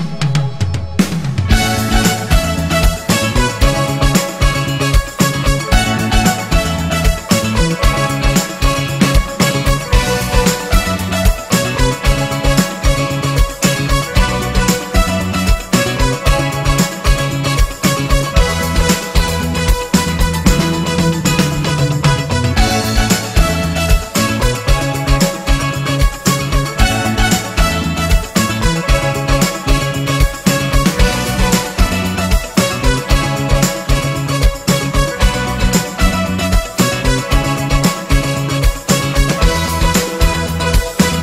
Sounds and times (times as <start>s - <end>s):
Music: 0.0s - 41.2s.